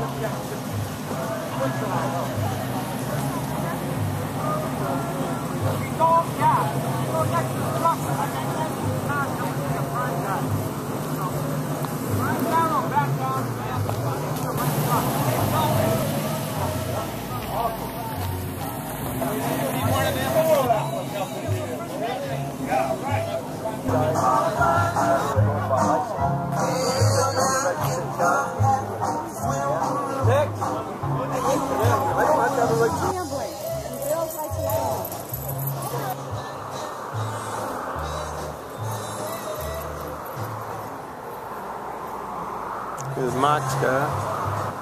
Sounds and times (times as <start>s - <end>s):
Speech: 0.0s - 18.4s, 19.1s - 24.6s, 29.5s - 36.4s, 43.0s - 44.2s.